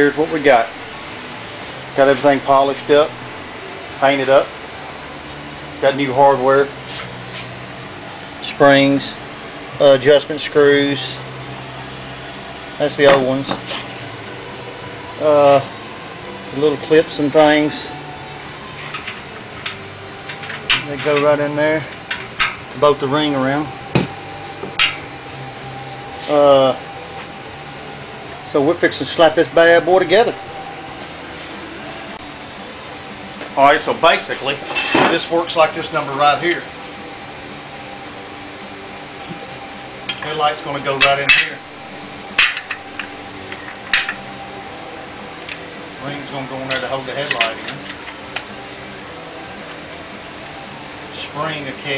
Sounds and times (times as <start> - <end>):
Speech: 0.0 - 0.7, 2.0 - 3.1, 4.0 - 4.5, 5.8 - 6.7, 8.4 - 9.2, 9.8 - 11.2, 12.8 - 13.6, 16.6 - 17.9, 20.8 - 21.9, 22.8 - 23.7, 26.3 - 26.8, 28.5 - 30.4, 33.6 - 36.7, 40.2 - 41.6, 46.0 - 47.8, 51.1 - 51.9.